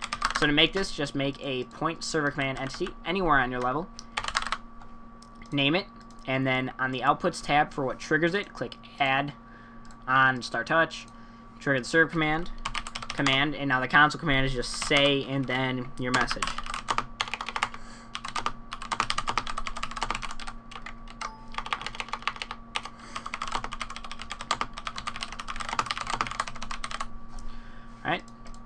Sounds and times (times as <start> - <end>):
Speech: 0.4 - 3.9, 5.5 - 9.4, 10.1 - 12.5, 13.2 - 16.6, 28.0 - 28.3
Typing: 16.2 - 27.1.